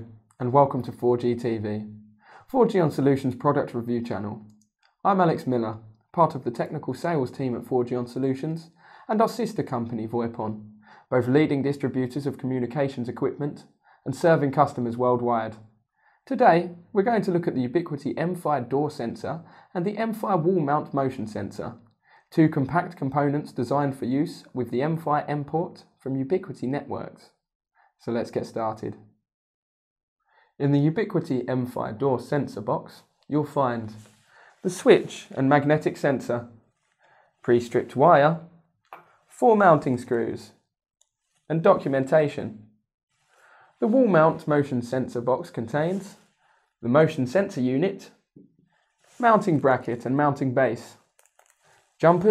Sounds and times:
Speech: 0.0s - 4.4s, 5.0s - 15.6s, 16.3s - 27.4s, 28.0s - 29.0s, 30.6s - 36.5s, 37.4s - 38.4s, 39.3s - 40.6s, 41.5s - 42.6s, 43.8s - 46.2s, 46.8s - 48.2s, 49.2s - 51.0s, 52.0s - 52.3s.

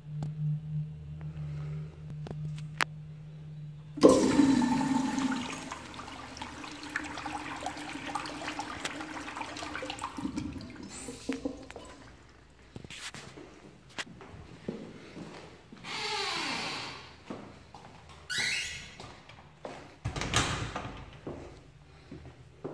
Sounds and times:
Toilet flush: 4.0s - 12.5s
Trickle, dribble: 4.3s - 12.5s.

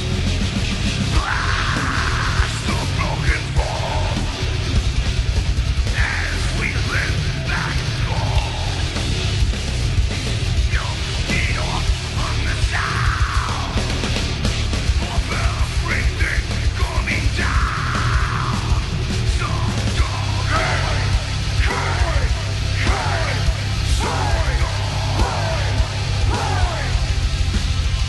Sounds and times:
Drum kit: 0.0s - 28.0s
Guitar: 0.0s - 28.0s
Heavy metal: 0.0s - 28.0s.

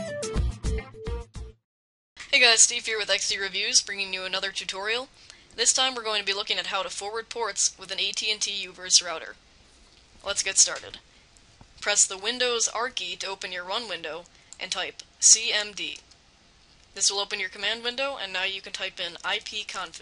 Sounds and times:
Narration, monologue: 2.2s - 20.0s.

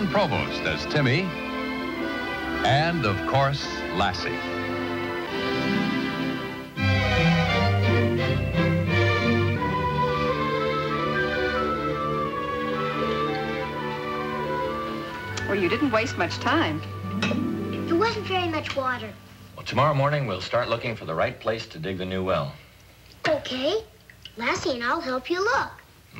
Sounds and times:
Music: 0.0s - 20.8s.

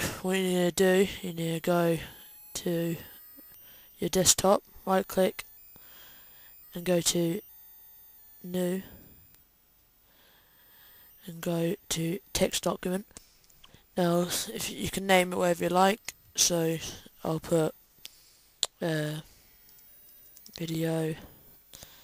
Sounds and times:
Speech: 0.0s - 3.0s, 4.0s - 5.4s, 6.8s - 7.4s, 11.2s - 13.1s, 14.0s - 17.8s, 18.8s - 19.3s, 20.6s - 21.2s.

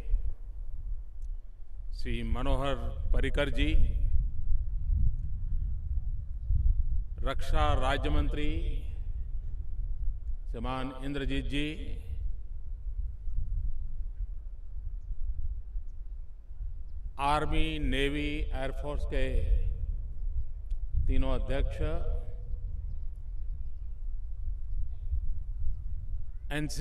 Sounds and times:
Male speech, man speaking: 2.0s - 4.0s, 7.2s - 8.8s, 10.6s - 12.0s, 17.2s - 19.6s, 21.1s - 22.3s, 26.5s - 26.8s.

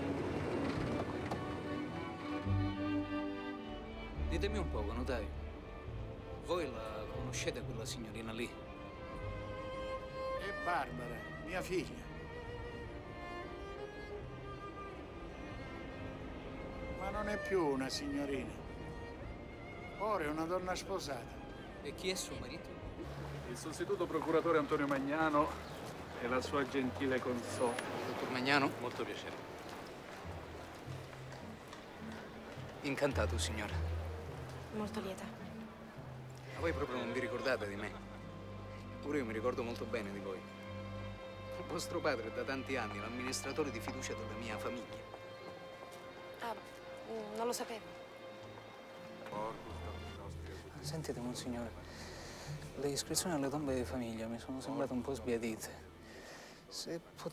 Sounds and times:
Music: 0.0s - 57.3s.

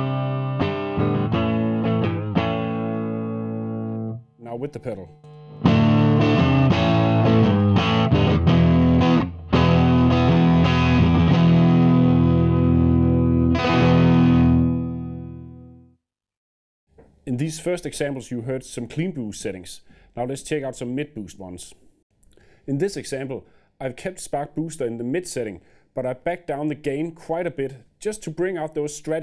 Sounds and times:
Bass guitar: 0.0s - 4.2s, 5.4s - 15.8s.

